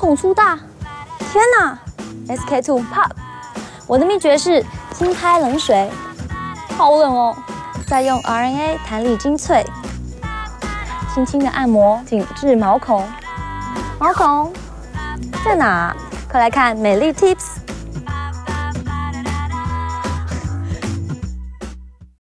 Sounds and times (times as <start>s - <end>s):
Speech: 0.0s - 0.6s, 1.3s - 3.2s, 3.9s - 6.0s, 6.8s - 9.7s, 11.1s - 13.2s, 14.0s - 14.6s, 15.4s - 17.6s
Music: 0.0s - 22.2s.